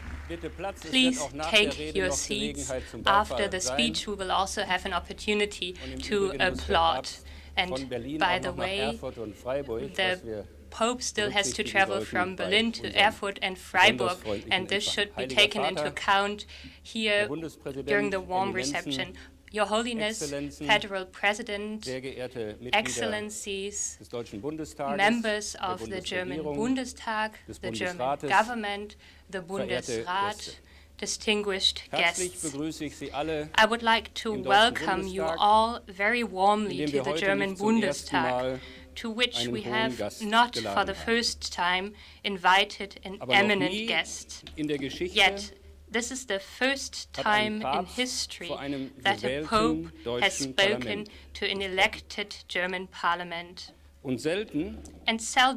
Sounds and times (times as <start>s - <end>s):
Narration, monologue: 0.0s - 55.5s
Male speech, man speaking: 0.3s - 4.7s, 5.6s - 16.3s, 17.0s - 21.0s, 21.8s - 23.4s, 24.0s - 26.9s, 27.5s - 28.8s, 29.4s - 30.6s, 31.9s - 41.3s, 43.2s - 45.5s, 47.2s - 51.1s, 54.0s - 54.8s
Female speech, woman speaking: 0.9s - 9.1s, 9.7s - 10.2s, 10.8s - 21.9s, 22.8s - 24.0s, 24.9s - 32.6s, 33.6s - 53.7s, 55.1s - 55.5s.